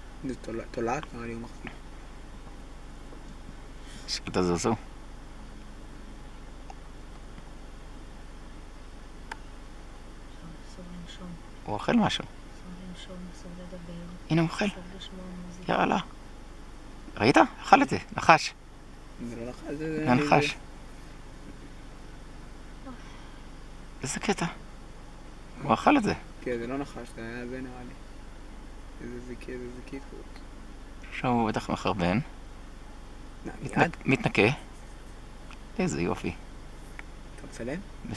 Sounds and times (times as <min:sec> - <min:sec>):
Outside, rural or natural: 0:00.0 - 0:38.1
Speech: 0:00.2 - 0:01.7, 0:04.1 - 0:04.8, 0:17.2 - 0:18.6, 0:19.2 - 0:20.6, 0:24.0 - 0:24.6, 0:25.6 - 0:28.0, 0:29.0 - 0:30.4, 0:31.1 - 0:32.3, 0:33.5 - 0:34.6, 0:35.8 - 0:36.4, 0:37.4 - 0:38.1.